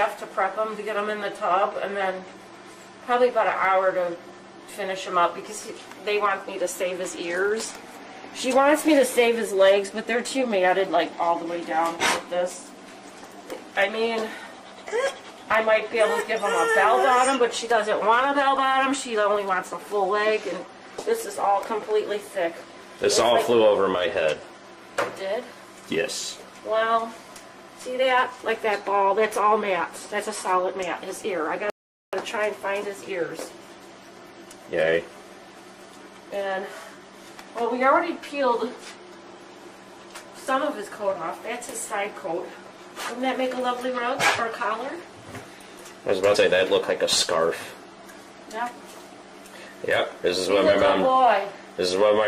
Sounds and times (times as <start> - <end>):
Whimper (dog): 14.7 - 17.6.